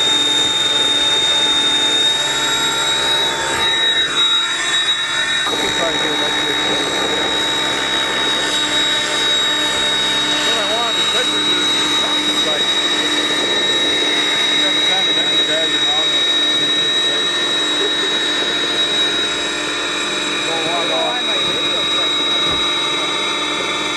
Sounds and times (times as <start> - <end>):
Helicopter: 0.0 - 23.9
Speech: 5.5 - 7.3, 10.5 - 12.7, 14.4 - 17.3, 20.4 - 22.6.